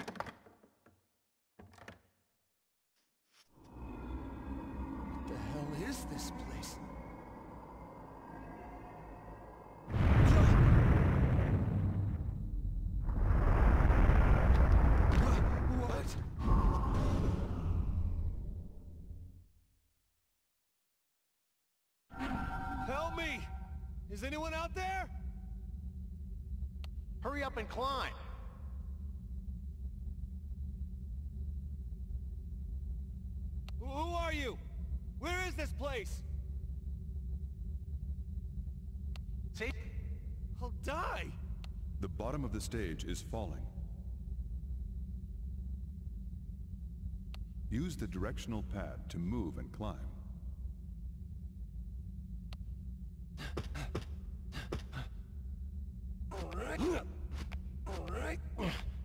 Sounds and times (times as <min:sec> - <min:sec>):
Speech: 0:05.3 - 0:06.9, 0:15.7 - 0:16.2, 0:24.1 - 0:25.2, 0:27.2 - 0:28.4, 0:33.8 - 0:34.6, 0:35.2 - 0:36.2, 0:40.6 - 0:41.4, 0:42.0 - 0:43.7, 0:47.7 - 0:50.2, 0:57.9 - 0:58.8.